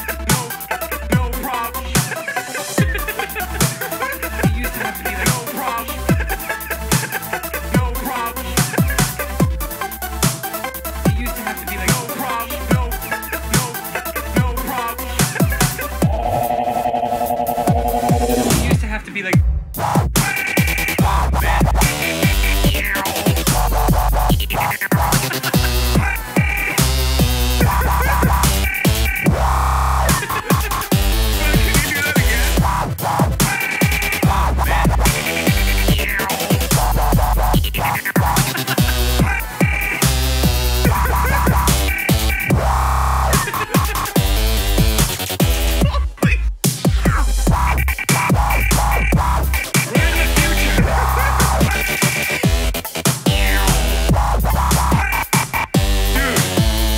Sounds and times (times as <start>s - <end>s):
Dubstep: 0.0s - 56.9s.